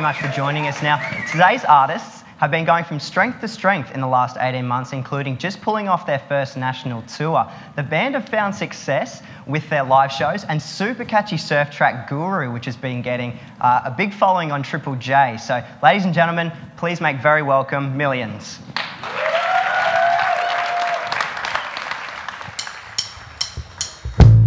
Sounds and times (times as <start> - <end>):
Speech: 0.0 - 18.7.